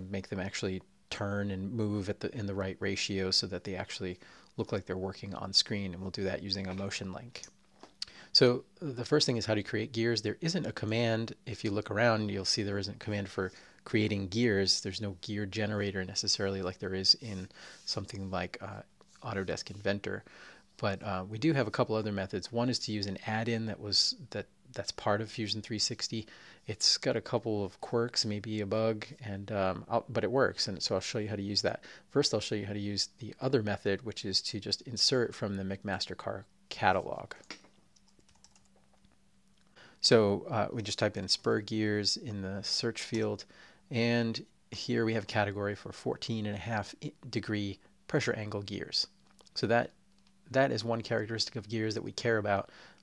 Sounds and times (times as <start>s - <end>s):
Speech: 0.0s - 7.6s, 8.3s - 37.6s, 40.0s - 53.0s.